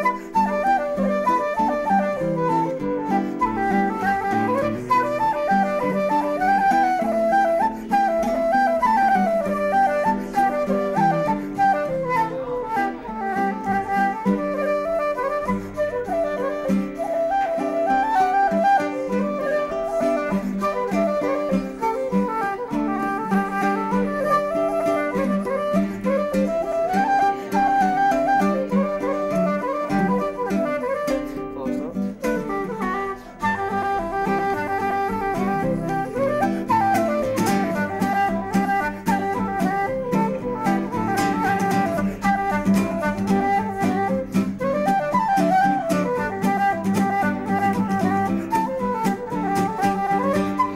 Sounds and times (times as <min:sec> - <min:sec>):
Acoustic guitar: 0:00.0 - 0:50.7.